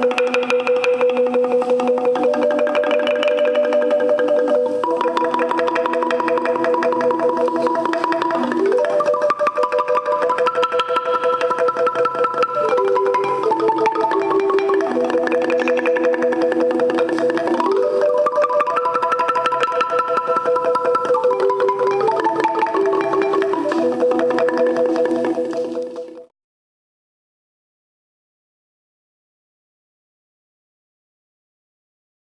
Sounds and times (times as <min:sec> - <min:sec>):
Marimba, xylophone: 0:00.0 - 0:26.3.